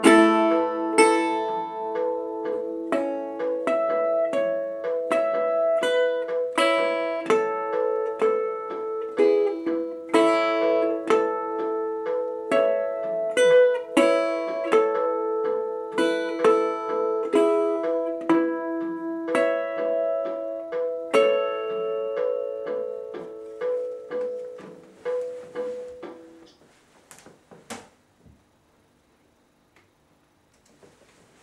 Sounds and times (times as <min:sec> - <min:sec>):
Guitar: 0:00.0 - 0:26.6.